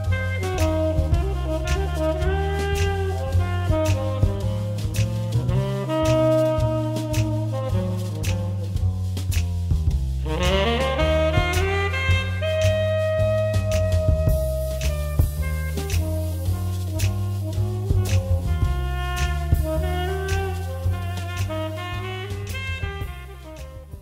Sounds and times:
Music: 0:00.0 - 0:24.0.

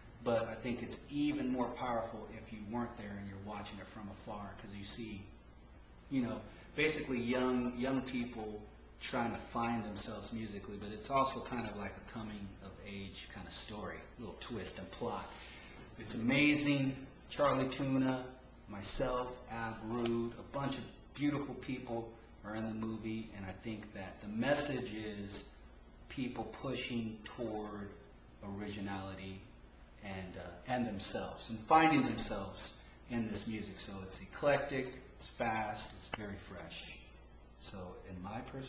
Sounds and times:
Speech: 0:00.2 - 0:05.4, 0:06.1 - 0:15.4, 0:16.0 - 0:38.6.

